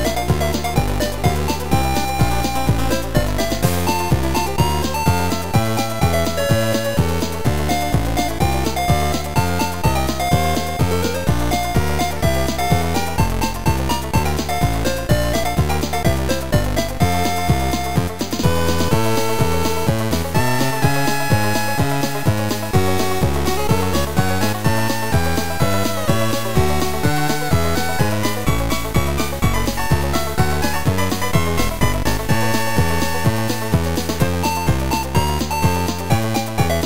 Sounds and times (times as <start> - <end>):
Soundtrack music: 0.0 - 36.8.